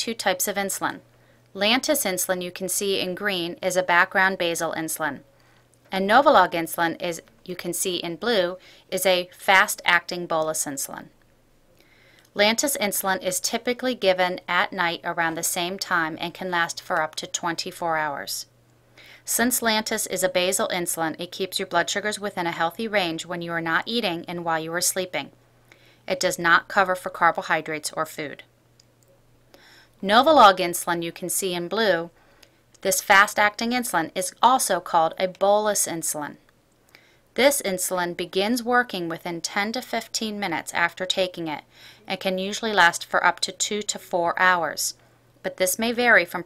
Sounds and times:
Speech: 0.0 - 1.0, 1.6 - 5.2, 5.9 - 11.1, 12.4 - 18.5, 19.3 - 25.3, 26.1 - 28.4, 30.0 - 32.1, 32.8 - 36.4, 37.4 - 46.4.

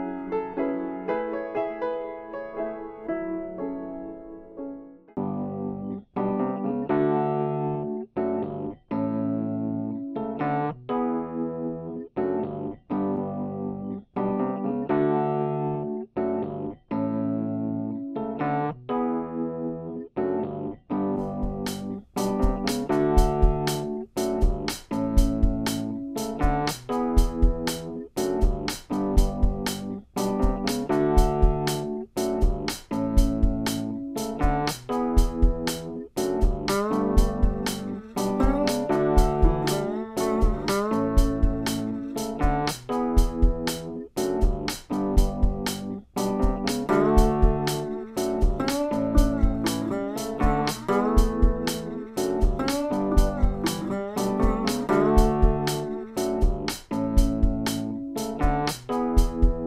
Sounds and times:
Music: 0.0 - 59.6.

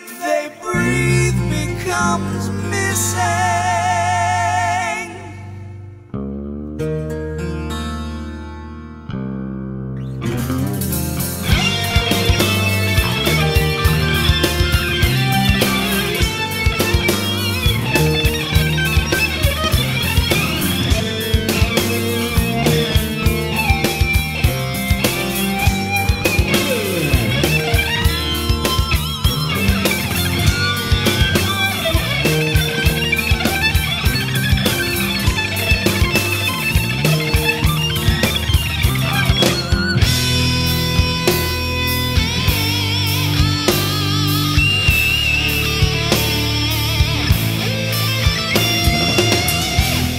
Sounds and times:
Heavy metal: 0.0 - 7.0, 10.2 - 50.1
Progressive rock: 0.0 - 50.1.

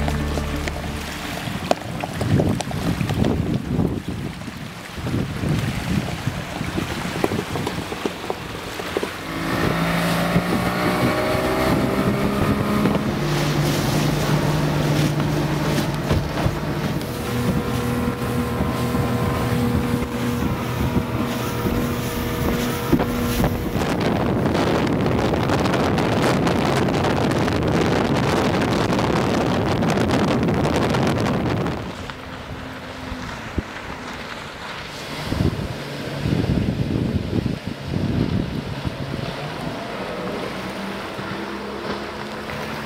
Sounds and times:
Motorboat, speedboat: 0.0 - 42.8.

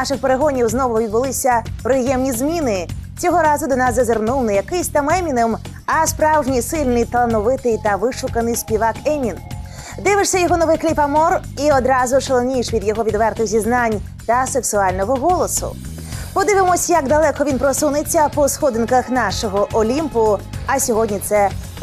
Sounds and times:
Speech: 0.0 - 9.4, 10.0 - 15.8, 16.4 - 21.8
Music: 0.0 - 21.8.

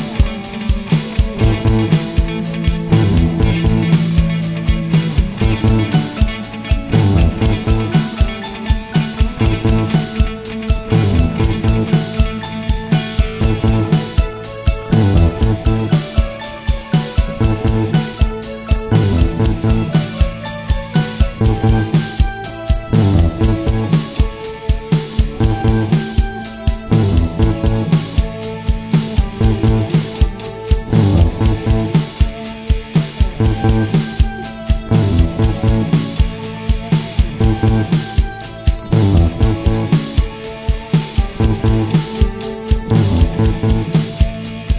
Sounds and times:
Music: 0.0 - 44.7.

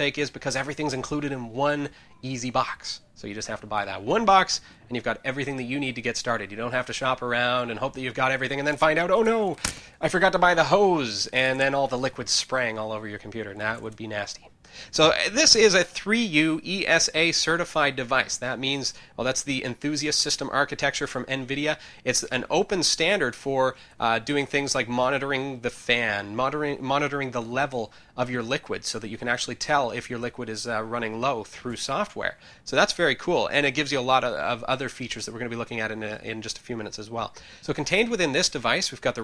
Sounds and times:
Speech: 0.0 - 39.2.

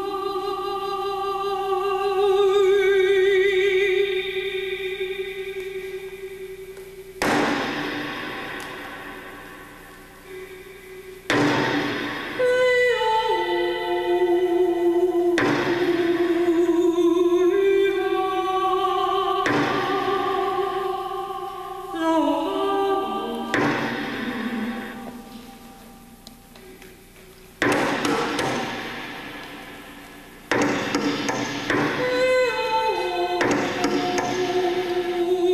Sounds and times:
Music: 0.0 - 35.5.

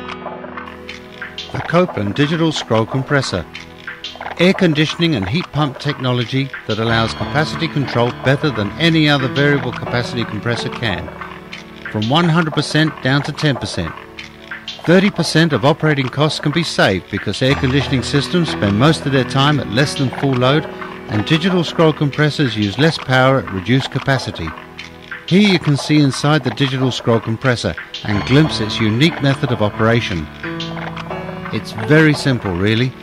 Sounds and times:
Music: 0.0 - 33.0
Speech: 1.5 - 3.5, 4.4 - 11.2, 11.9 - 14.0, 14.8 - 24.6, 25.3 - 30.3, 31.5 - 33.0.

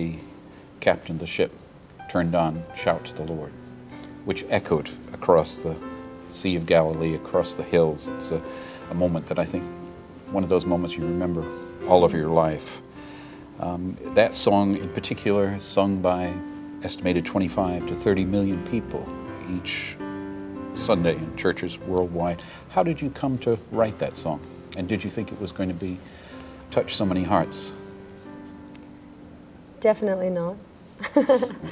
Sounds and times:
Music: 0.0 - 31.7.

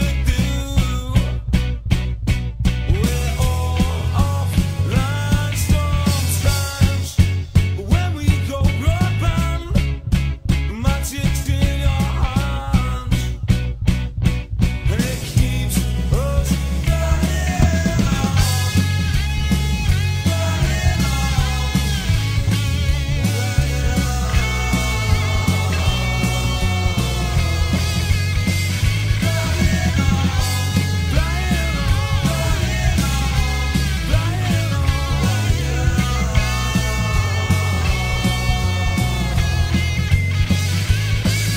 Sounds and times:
Psychedelic rock: 0.0 - 41.5.

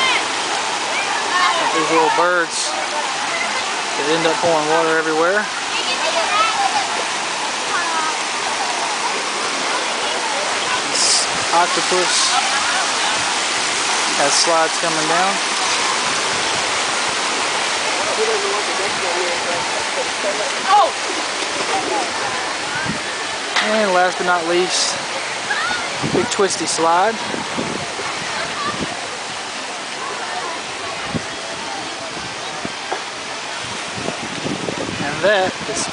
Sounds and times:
Waterfall: 0.0 - 35.9.

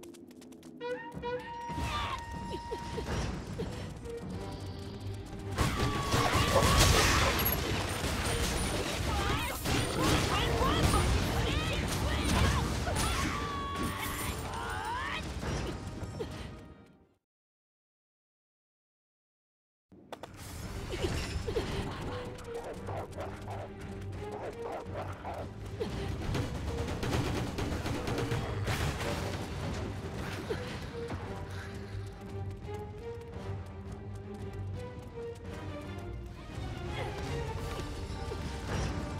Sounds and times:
Music: 0.0 - 17.2, 20.0 - 39.1
Speech: 9.1 - 15.2.

